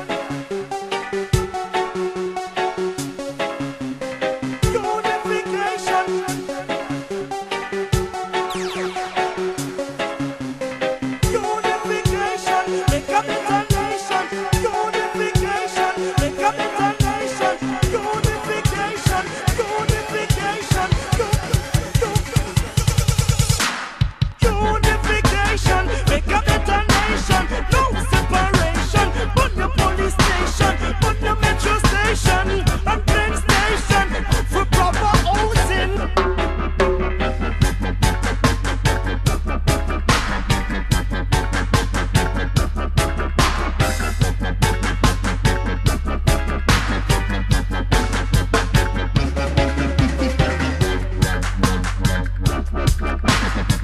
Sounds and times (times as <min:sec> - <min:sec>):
Electronic music: 0:00.0 - 0:53.8.